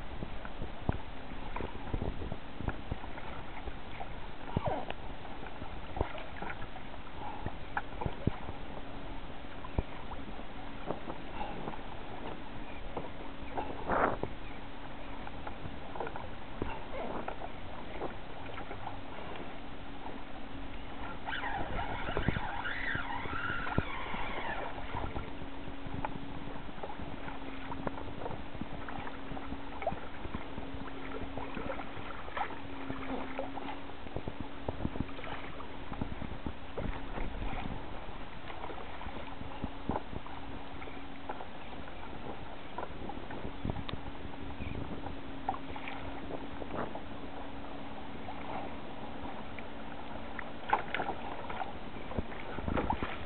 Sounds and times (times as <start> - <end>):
Rowboat, canoe, kayak: 0.0 - 53.2.